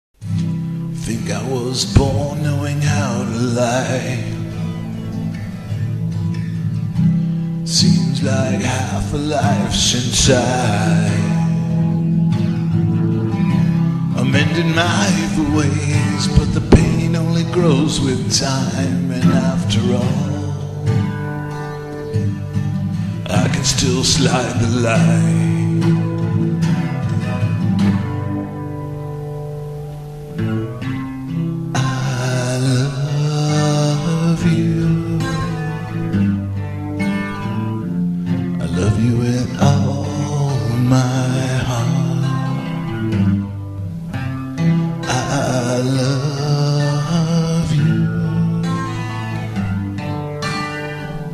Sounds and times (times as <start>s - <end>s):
Acoustic guitar: 0.2s - 51.3s
Strum: 0.2s - 51.3s.